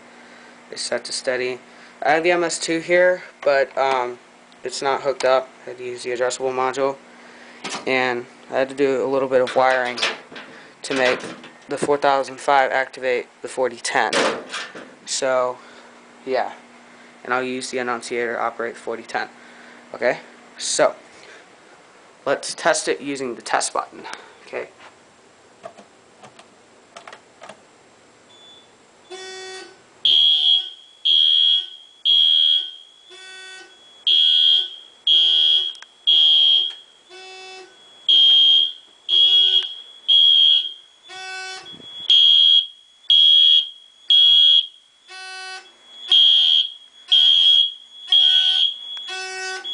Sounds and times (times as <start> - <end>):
Fire alarm: 28.3 - 49.7
Smoke detector, smoke alarm: 28.3 - 49.7.